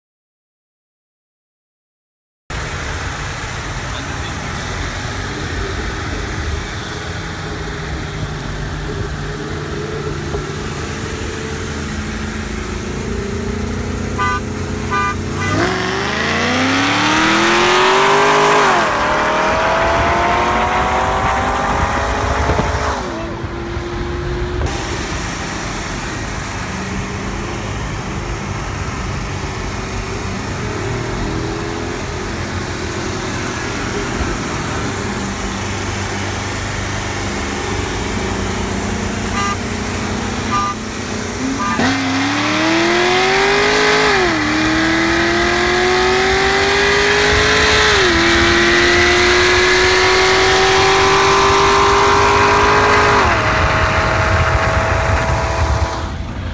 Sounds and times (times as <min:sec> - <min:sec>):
Engine: 0:02.5 - 0:56.5
Outside, urban or manmade: 0:02.5 - 0:56.5
Race car, auto racing: 0:02.5 - 0:56.5.